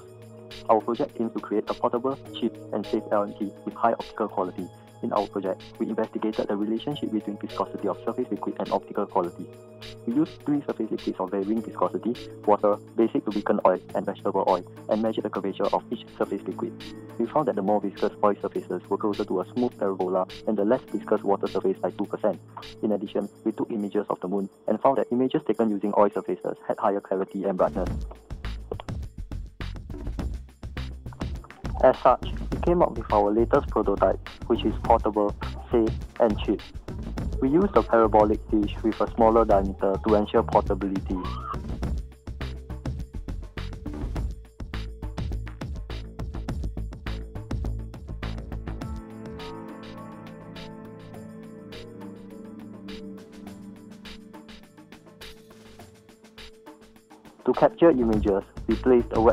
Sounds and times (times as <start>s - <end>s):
Music: 0.0s - 59.3s
Speech: 0.7s - 9.5s, 10.1s - 28.1s, 31.8s - 36.6s, 37.4s - 41.5s, 57.5s - 59.3s.